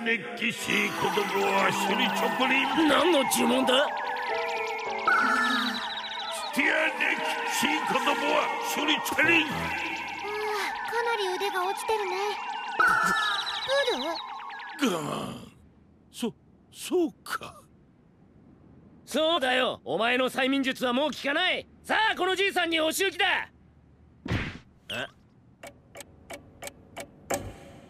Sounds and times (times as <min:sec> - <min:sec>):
Sigh: 0:14.8 - 0:15.6.